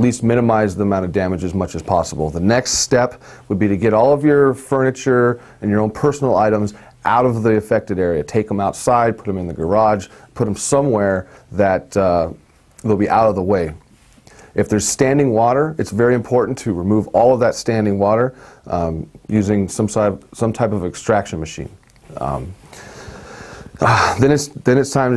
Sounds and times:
Speech: 0.0 - 13.8, 14.6 - 22.6, 23.8 - 25.1.

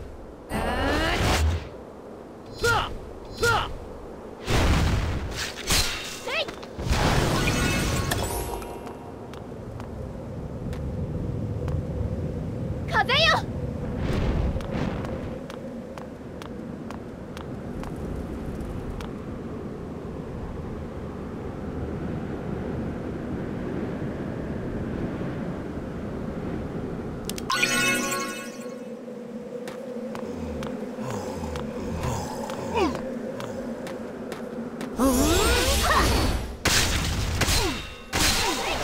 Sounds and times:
Speech: 6.2 - 6.5, 12.9 - 13.5.

